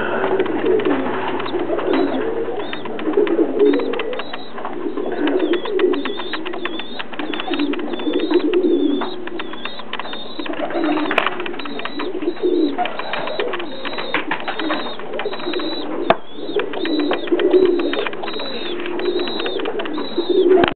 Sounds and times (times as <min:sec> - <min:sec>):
Pigeon, dove: 0:00.0 - 0:20.7.